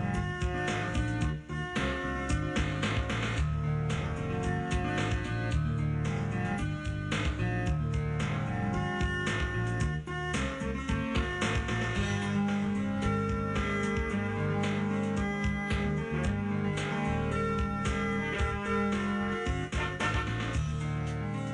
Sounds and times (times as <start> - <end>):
Blues: 0.0 - 21.5
Rhythm and blues: 0.0 - 21.5.